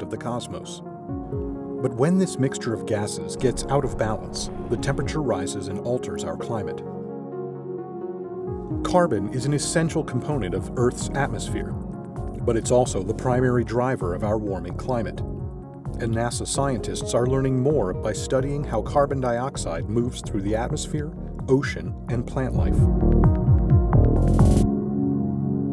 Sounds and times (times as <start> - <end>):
Speech: 0.0 - 0.8, 1.8 - 6.8, 8.9 - 11.8, 12.4 - 15.2, 16.0 - 22.9
Music: 0.0 - 25.7.